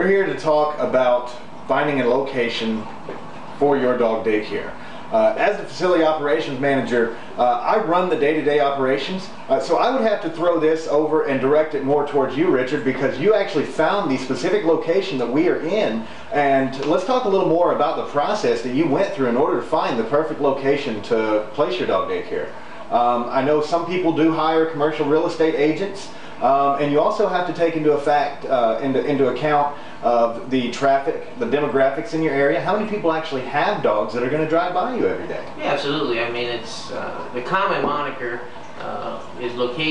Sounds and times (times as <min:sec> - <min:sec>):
Speech: 0:00.0 - 0:03.0, 0:03.6 - 0:39.9.